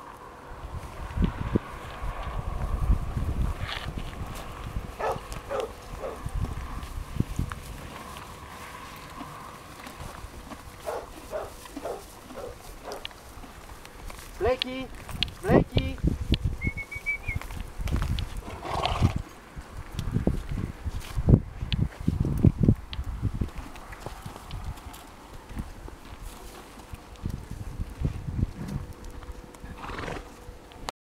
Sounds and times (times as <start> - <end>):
Clip-clop: 0.0 - 30.9.